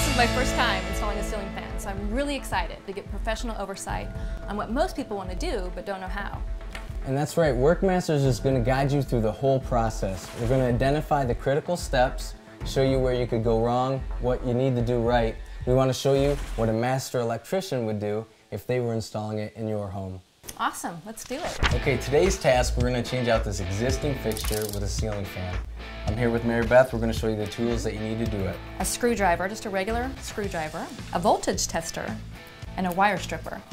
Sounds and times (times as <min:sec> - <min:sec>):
Music: 0:00.0 - 0:16.9, 0:21.6 - 0:33.7
Speech: 0:07.1 - 0:32.2.